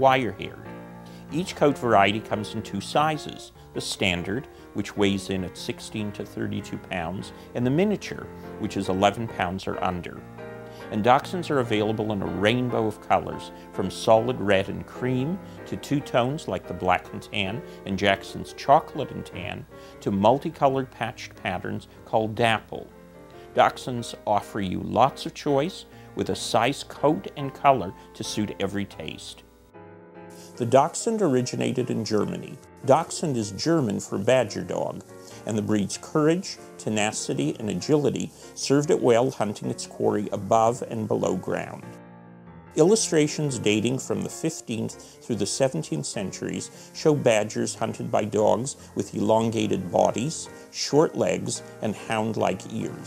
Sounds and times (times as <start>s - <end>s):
Speech: 0.0s - 10.3s, 10.9s - 29.4s, 30.4s - 41.9s, 42.8s - 53.0s
Music: 0.0s - 53.0s.